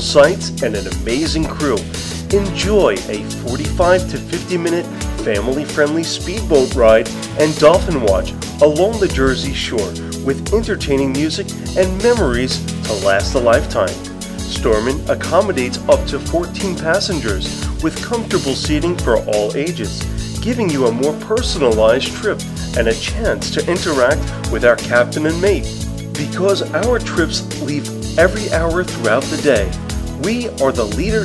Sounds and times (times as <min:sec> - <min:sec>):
Music: 0:00.0 - 0:31.2
Speech: 0:00.0 - 0:31.2.